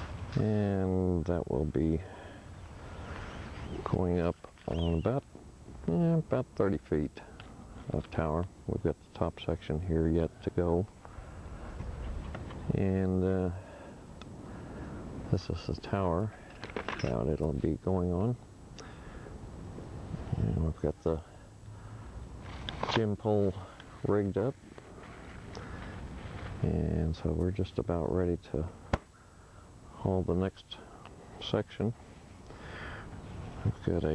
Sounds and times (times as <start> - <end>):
Speech: 0.3 - 2.2, 3.8 - 5.2, 5.8 - 7.3, 7.9 - 10.9, 12.7 - 13.7, 15.3 - 16.4, 17.0 - 18.4, 20.3 - 21.4, 22.8 - 24.6, 26.6 - 28.8, 29.9 - 32.0, 33.6 - 34.1.